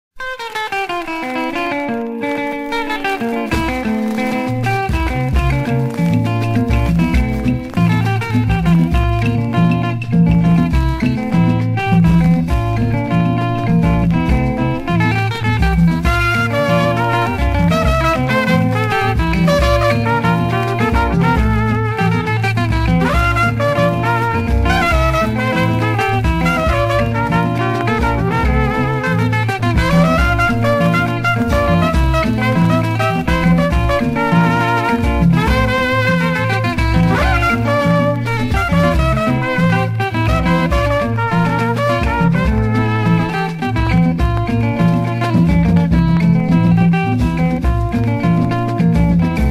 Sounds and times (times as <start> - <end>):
Music: 0.2 - 49.5.